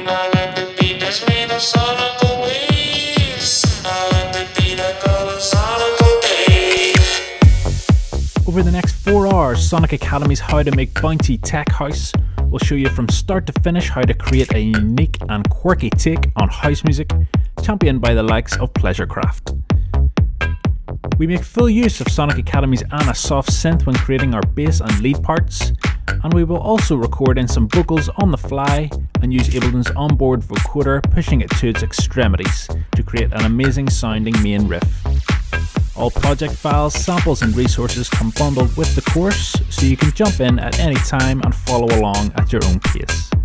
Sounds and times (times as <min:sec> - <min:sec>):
Music: 0:00.0 - 0:43.4
Speech: 0:08.5 - 0:19.4, 0:21.2 - 0:34.9, 0:36.0 - 0:43.3.